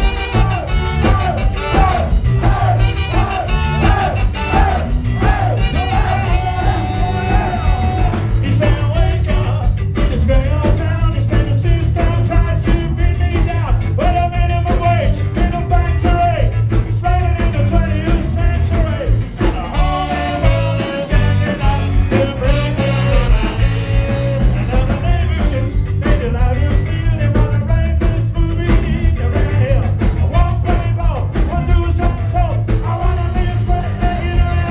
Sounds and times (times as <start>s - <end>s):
Music: 0.0s - 34.7s.